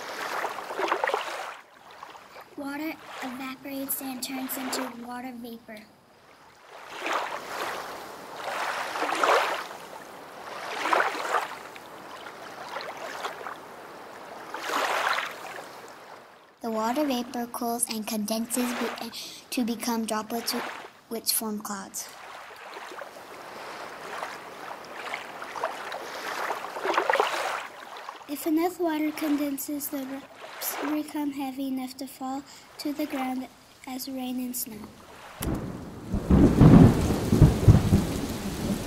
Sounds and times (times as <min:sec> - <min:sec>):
Stream: 0:00.0 - 0:38.8
Speech: 0:02.6 - 0:05.9, 0:16.6 - 0:22.2, 0:28.3 - 0:34.9.